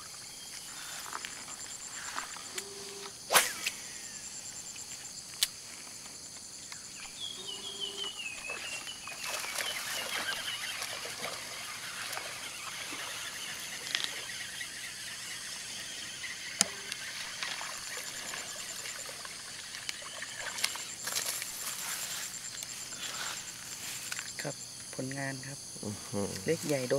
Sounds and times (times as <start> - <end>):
Speech: 24.4 - 26.9.